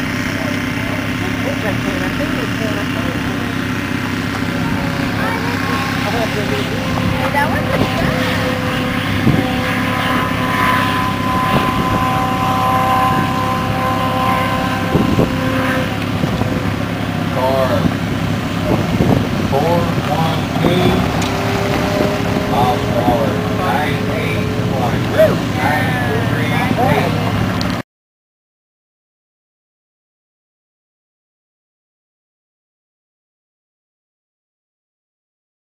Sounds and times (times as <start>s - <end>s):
Speech: 17.4s - 17.9s, 19.5s - 21.2s, 22.5s - 27.3s.